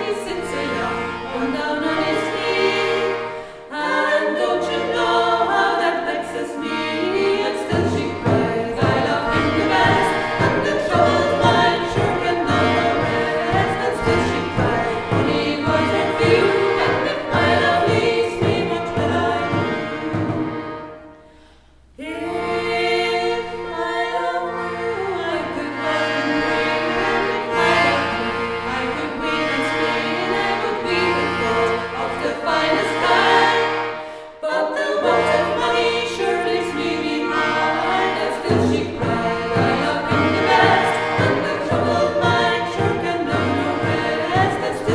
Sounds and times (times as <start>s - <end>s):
A capella: 0.0s - 20.8s, 22.0s - 44.9s.